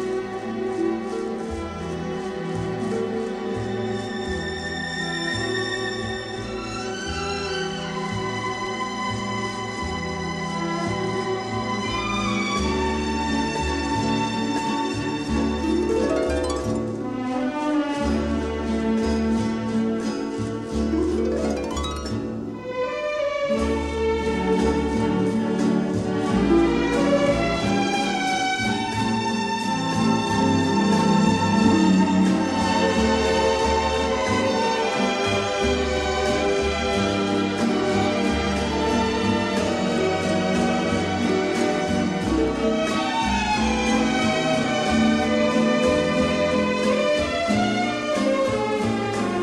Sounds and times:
New-age music: 0:00.0 - 0:49.4.

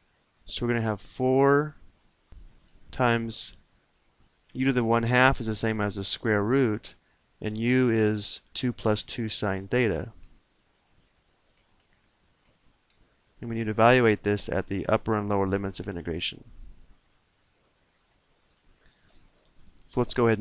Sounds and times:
Speech: 0:00.5 - 0:01.8, 0:02.9 - 0:03.6, 0:04.6 - 0:10.2, 0:13.4 - 0:16.5, 0:19.9 - 0:20.4.

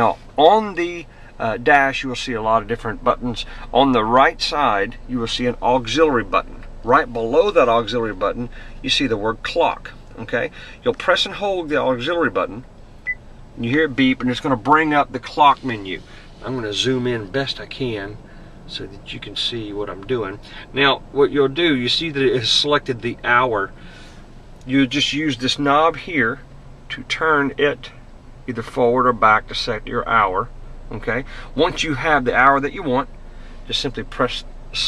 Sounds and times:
Speech: 0:00.0 - 0:12.6, 0:13.6 - 0:23.7, 0:24.7 - 0:33.1, 0:33.7 - 0:34.8.

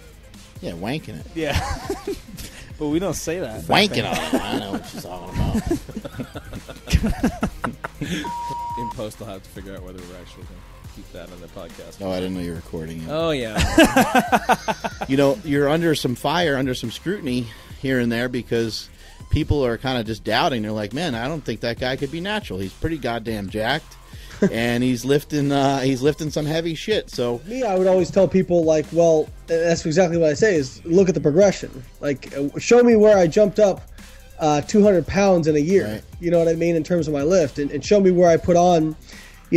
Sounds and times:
Music: 0:00.0 - 0:39.5
Speech: 0:00.6 - 0:01.6, 0:02.8 - 0:05.8, 0:08.8 - 0:13.6, 0:15.1 - 0:23.9, 0:24.5 - 0:33.8, 0:34.4 - 0:39.5.

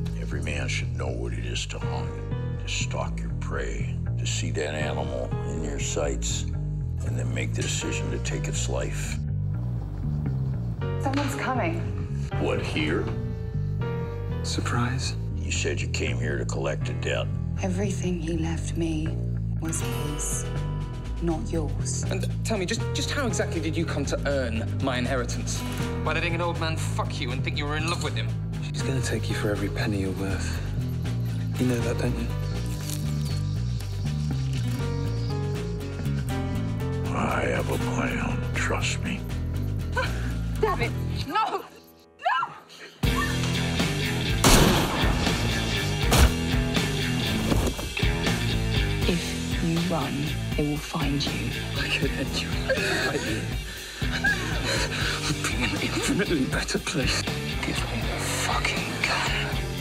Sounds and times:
Music: 0:00.0 - 0:59.8.

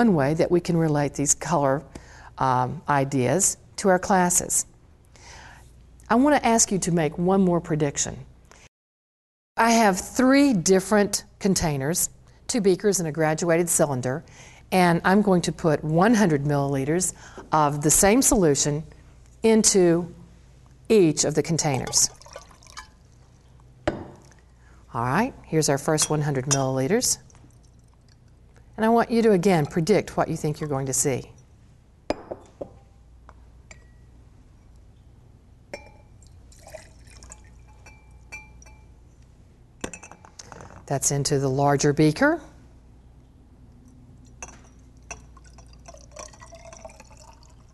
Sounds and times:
Speech: 0:06.1 - 0:08.3, 0:09.6 - 0:14.2, 0:14.8 - 0:18.9, 0:19.5 - 0:20.2, 0:20.9 - 0:22.1, 0:24.9 - 0:27.2, 0:28.8 - 0:31.4, 0:40.9 - 0:42.6.

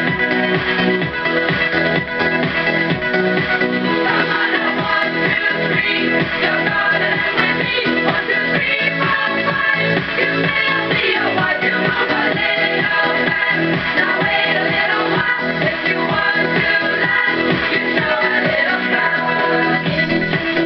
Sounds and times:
Music: 0:00.0 - 0:20.6.

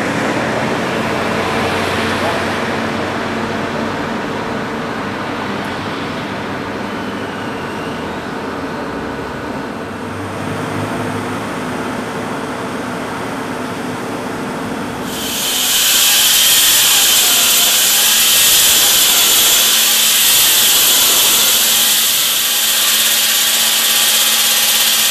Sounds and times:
Inside, large room or hall: 0:00.0 - 0:25.1.

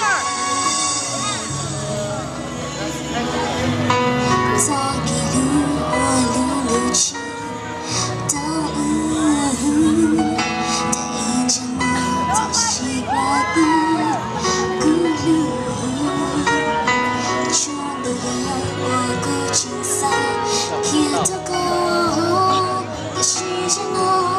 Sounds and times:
Music: 0:00.0 - 0:24.3
Female singing: 0:04.6 - 0:07.6, 0:08.2 - 0:24.3
Speech: 0:11.3 - 0:14.2.

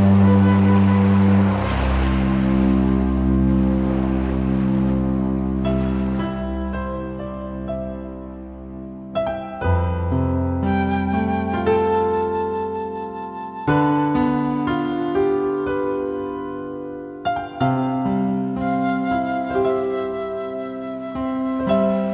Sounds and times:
Music: 0:00.0 - 0:22.1.

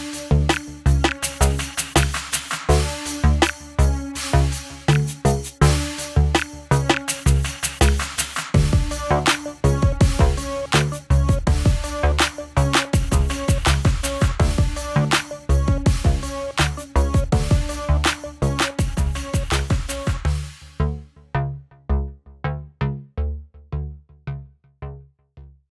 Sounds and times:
Music: 0:00.0 - 0:25.7.

